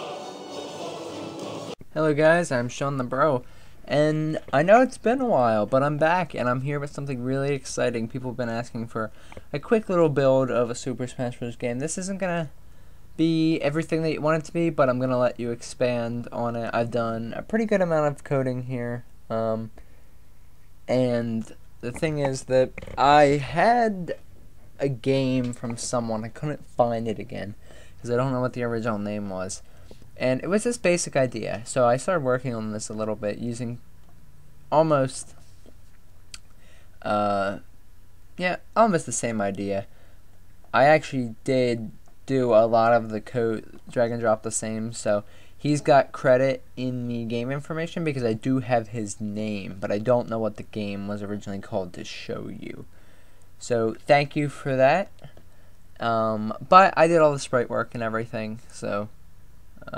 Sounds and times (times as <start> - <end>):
Speech: 1.9 - 12.6, 13.2 - 19.8, 20.9 - 24.2, 24.8 - 33.8, 34.7 - 35.4, 37.0 - 37.7, 38.4 - 39.9, 40.7 - 52.9, 53.6 - 55.3, 56.0 - 59.2.